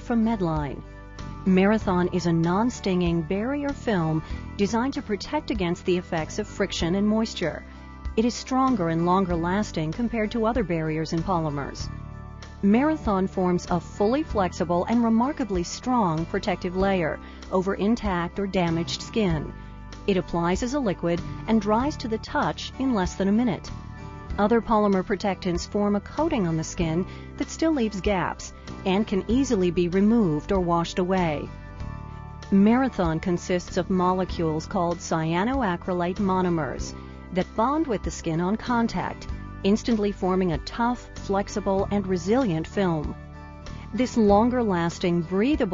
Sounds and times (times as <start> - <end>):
Speech: 0.0 - 0.8, 1.5 - 7.6, 8.2 - 11.9, 12.6 - 19.5, 20.1 - 23.7, 24.4 - 31.5, 32.5 - 43.2, 44.0 - 45.7
Music: 0.0 - 45.7.